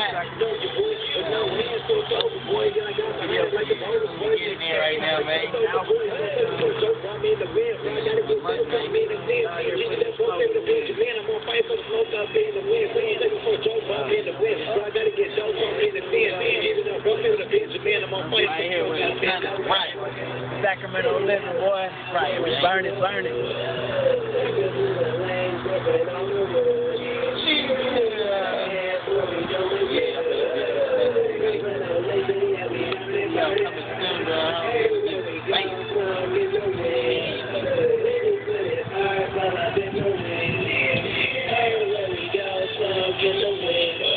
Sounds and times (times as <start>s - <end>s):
Speech: 0.0s - 12.4s, 13.6s - 23.9s.